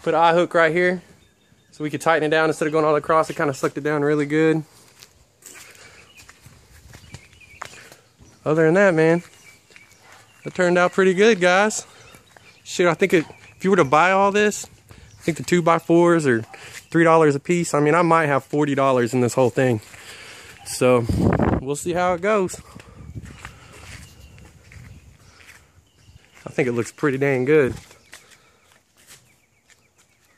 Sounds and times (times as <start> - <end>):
Speech: 0.0 - 1.1, 1.8 - 4.7, 8.4 - 9.3, 10.4 - 11.9, 12.7 - 19.9, 20.6 - 22.7, 26.4 - 27.8.